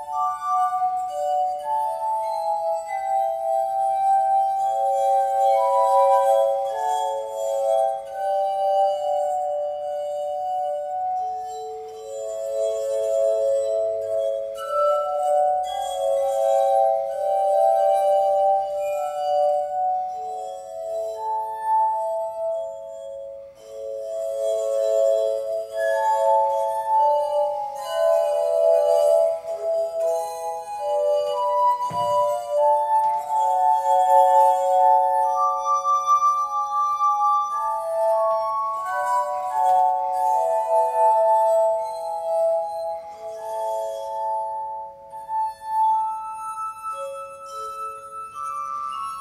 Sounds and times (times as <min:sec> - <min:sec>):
Glass: 0:00.0 - 0:49.2
Music: 0:00.0 - 0:49.2.